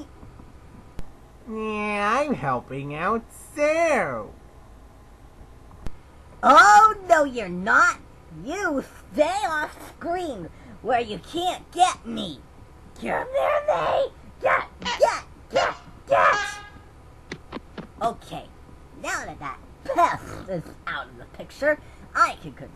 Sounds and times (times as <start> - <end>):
Speech: 1.5 - 4.3, 6.4 - 12.4, 13.0 - 16.6, 18.0 - 22.7.